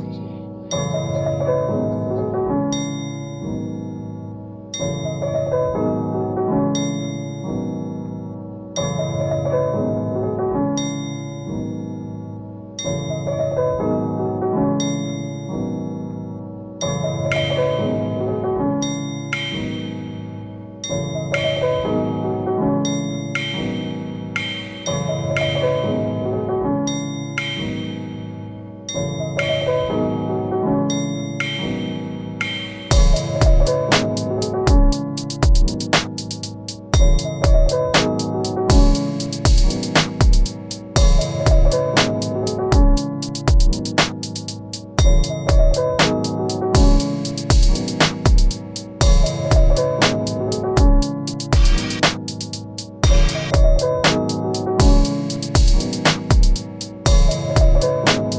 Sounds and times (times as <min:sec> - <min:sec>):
Glockenspiel: 0:00.0 - 0:35.7, 0:36.9 - 0:40.4, 0:45.0 - 0:51.7.